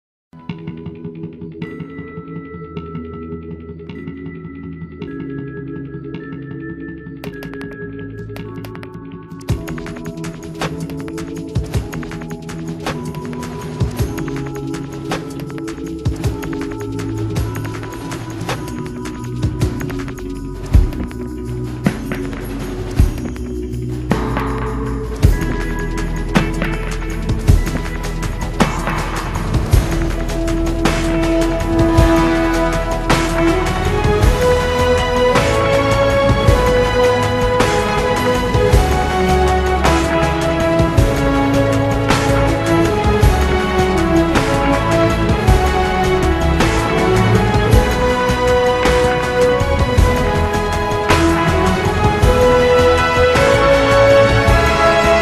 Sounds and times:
Theme music: 0.4 - 55.2.

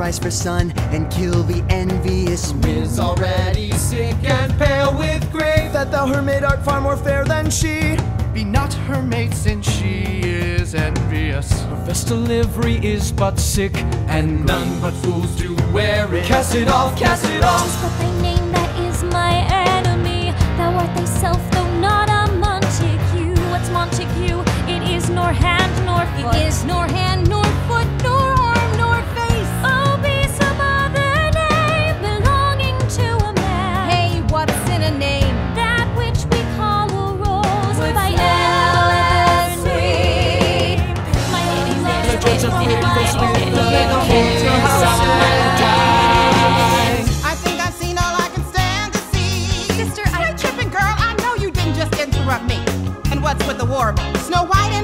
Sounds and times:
Music: 0.0 - 54.8.

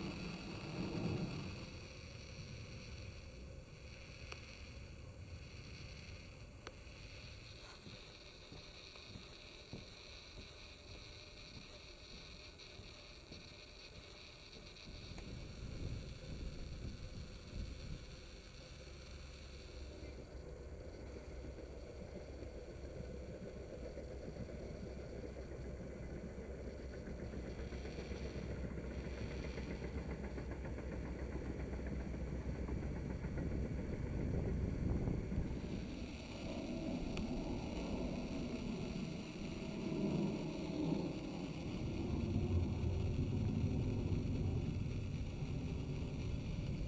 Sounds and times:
Outside, rural or natural: 0.0 - 46.8.

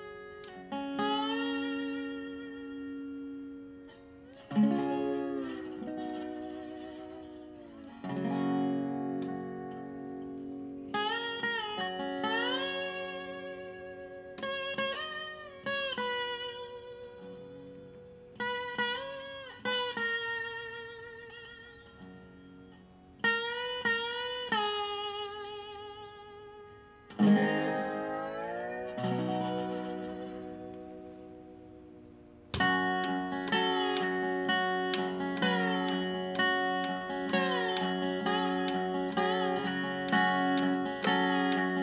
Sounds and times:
Music: 0.0 - 41.8.

